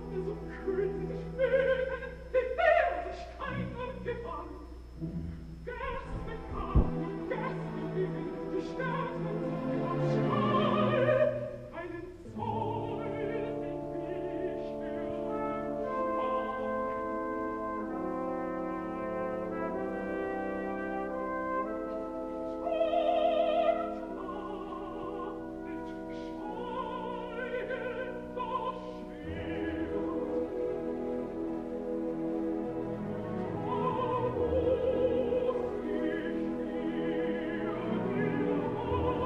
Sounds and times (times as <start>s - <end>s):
Music: 0.0s - 39.2s
Singing: 5.7s - 17.2s, 22.6s - 30.7s, 33.4s - 39.2s.